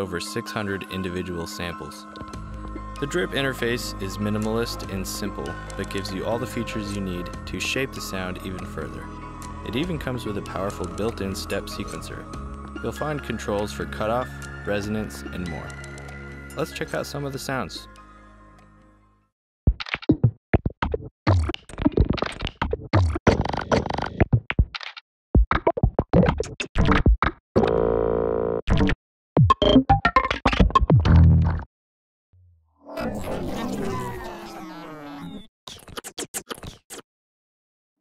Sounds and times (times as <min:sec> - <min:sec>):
Speech: 0:00.0 - 0:02.1, 0:03.0 - 0:09.1, 0:09.7 - 0:15.8, 0:16.6 - 0:17.9, 0:32.9 - 0:34.8
Music: 0:00.0 - 0:19.4.